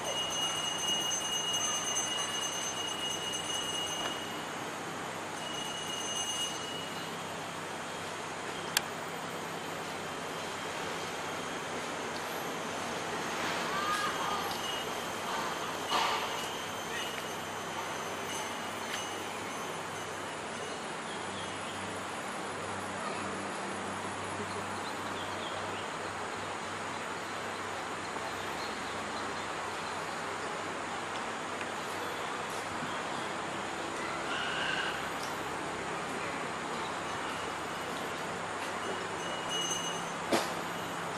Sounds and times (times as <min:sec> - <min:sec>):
Speech: 0:22.9 - 0:23.6.